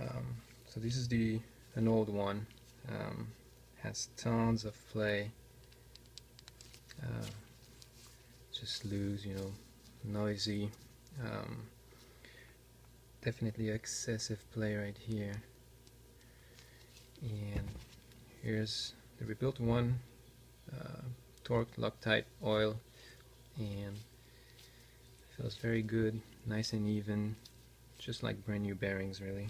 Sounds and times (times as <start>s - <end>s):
Speech: 0.0s - 5.4s, 7.0s - 7.5s, 8.5s - 11.7s, 13.2s - 15.5s, 17.2s - 17.8s, 18.4s - 20.1s, 20.7s - 22.8s, 23.6s - 24.1s, 25.3s - 27.4s, 28.0s - 29.4s.